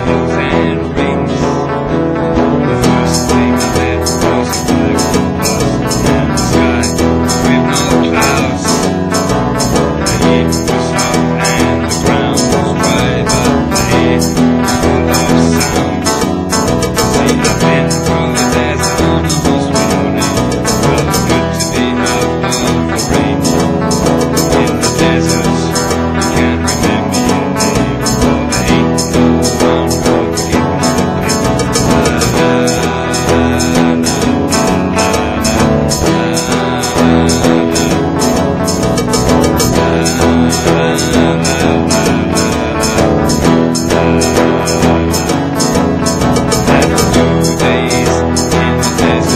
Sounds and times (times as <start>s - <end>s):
Folk music: 0.0s - 49.3s.